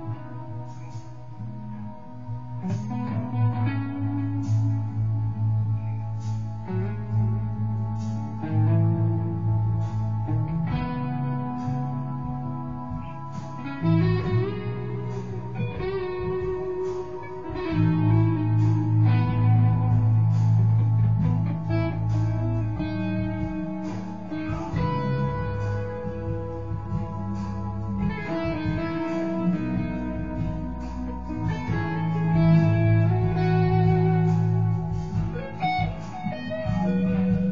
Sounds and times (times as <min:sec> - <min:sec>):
Strum: 0:00.0 - 0:37.5.